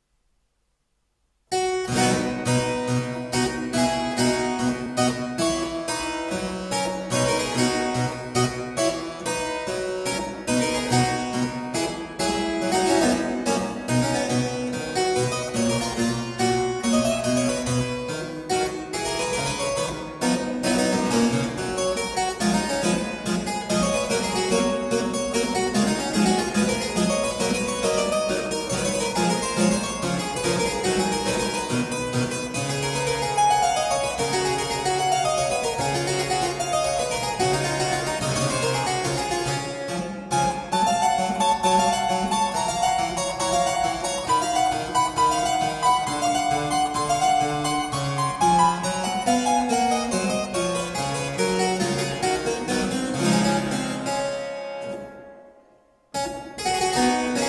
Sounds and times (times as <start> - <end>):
Harpsichord: 1.5 - 57.4.